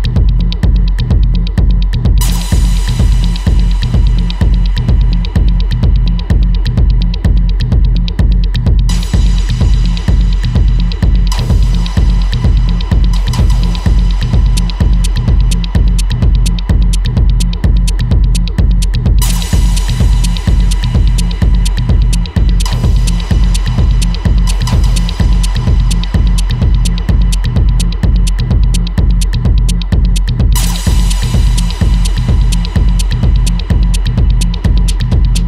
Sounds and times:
Music: 0:00.0 - 0:35.4.

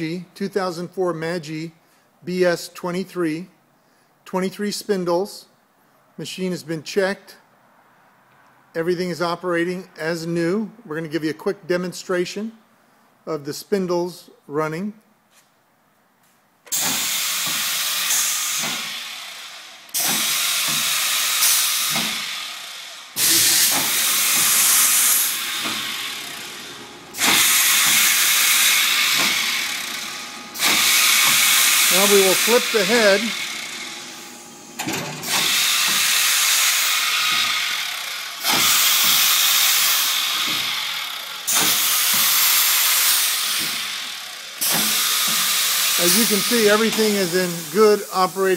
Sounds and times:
Speech: 0:00.0 - 0:03.6, 0:04.3 - 0:05.5, 0:06.2 - 0:07.4, 0:08.8 - 0:12.6, 0:13.3 - 0:15.0, 0:31.9 - 0:33.4, 0:46.0 - 0:48.5
Drill: 0:16.7 - 0:48.5.

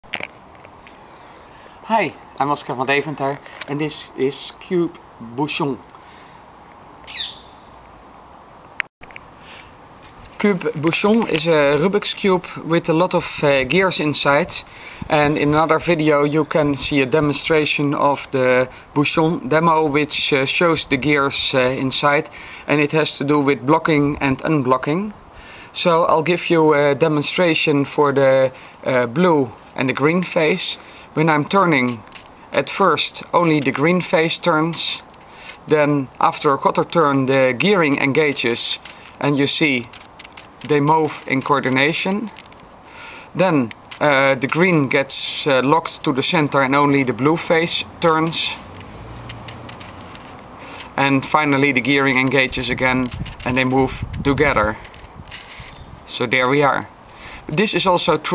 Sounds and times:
Bird: 0:07.1 - 0:07.7.

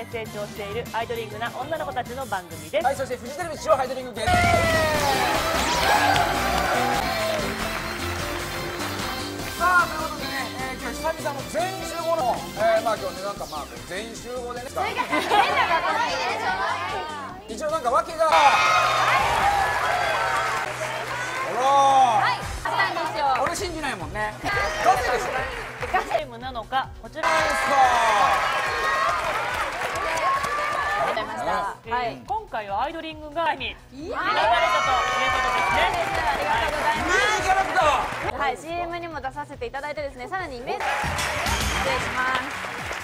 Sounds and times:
Music of Asia: 0:04.2 - 0:15.8, 0:40.8 - 0:43.0.

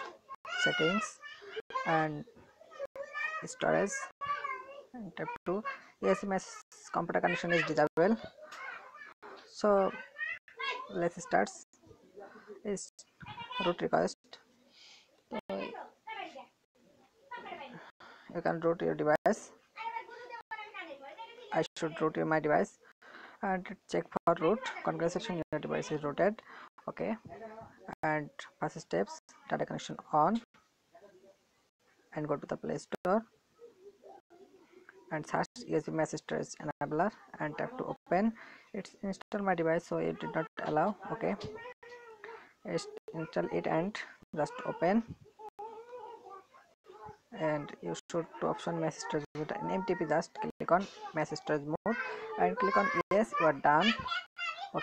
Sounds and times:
Speech: 0:23.4 - 0:30.5, 0:35.1 - 0:41.6, 0:42.6 - 0:45.1, 0:47.4 - 0:54.1.

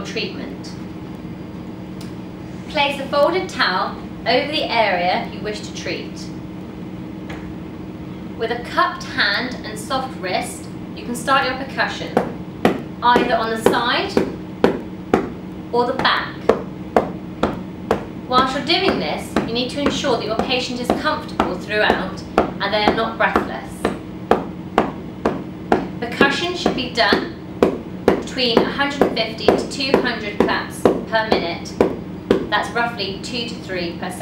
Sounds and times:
Speech: 0:00.0 - 0:00.8, 0:02.7 - 0:06.4, 0:08.4 - 0:12.2, 0:13.0 - 0:14.3, 0:15.8 - 0:16.4, 0:18.3 - 0:23.9, 0:26.0 - 0:27.4, 0:28.2 - 0:31.8, 0:32.5 - 0:34.2.

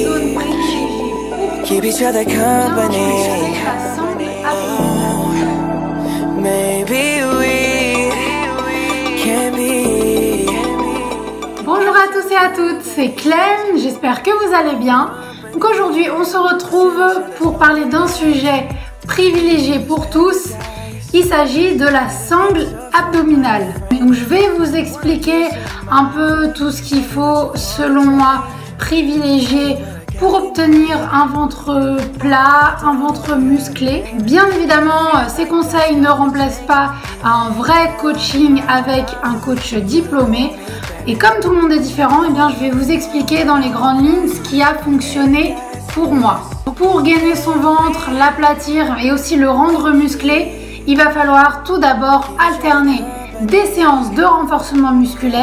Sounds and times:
Speech: 0:00.0 - 0:05.6, 0:11.6 - 0:55.4
Music: 0:00.0 - 0:55.4.

